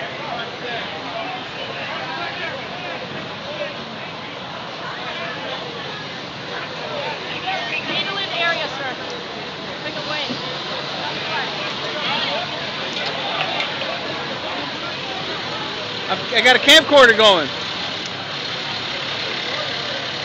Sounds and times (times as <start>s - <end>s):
Vehicle: 0.0s - 20.2s.